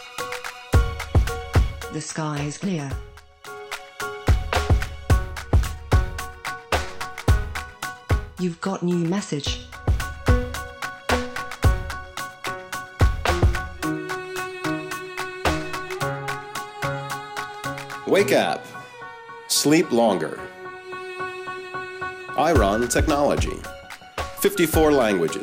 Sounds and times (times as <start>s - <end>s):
Music: 0.0s - 25.4s
Speech: 2.0s - 3.0s, 8.4s - 9.7s, 18.1s - 18.6s, 19.5s - 20.4s, 22.4s - 23.7s, 24.4s - 25.4s.